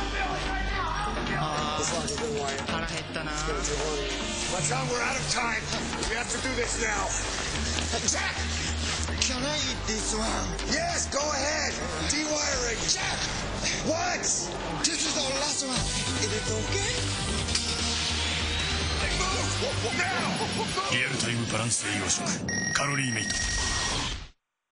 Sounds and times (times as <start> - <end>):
Music: 0.0 - 24.2
Speech: 19.0 - 23.3.